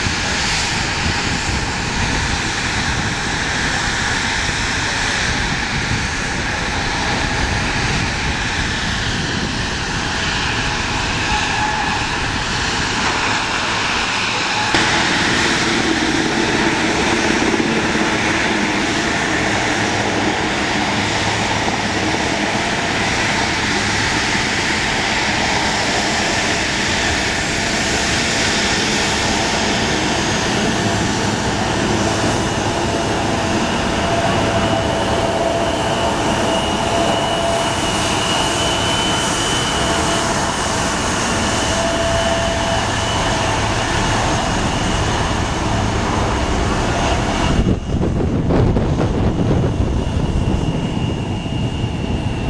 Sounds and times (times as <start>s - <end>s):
Fixed-wing aircraft, airplane: 0.0s - 52.4s.